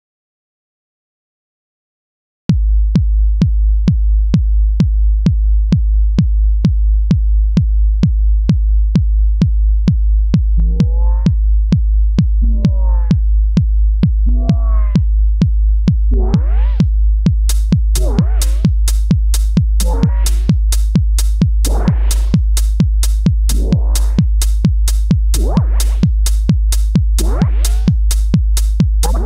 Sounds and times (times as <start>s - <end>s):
Techno: 7.4s - 29.2s.